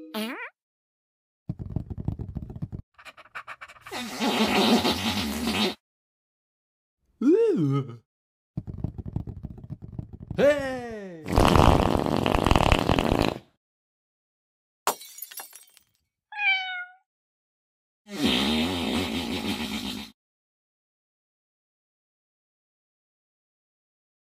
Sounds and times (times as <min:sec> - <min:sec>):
Meow: 0:16.3 - 0:17.1.